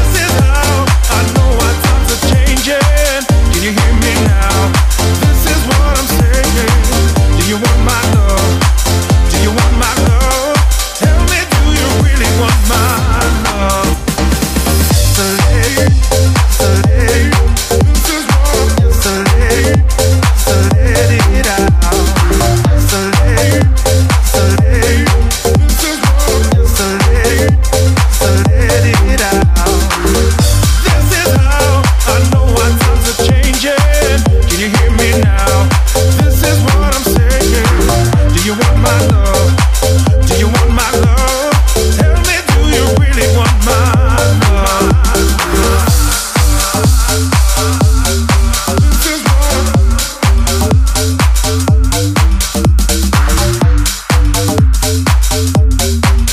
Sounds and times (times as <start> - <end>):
Pop music: 0.0 - 56.3
Soundtrack music: 0.0 - 56.3.